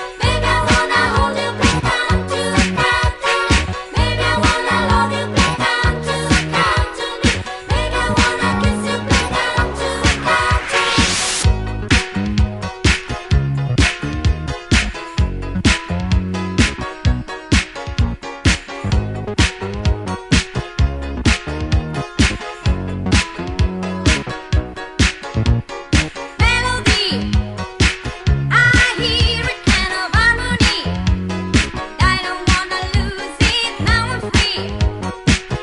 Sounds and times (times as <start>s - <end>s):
Funk: 0.0s - 35.6s.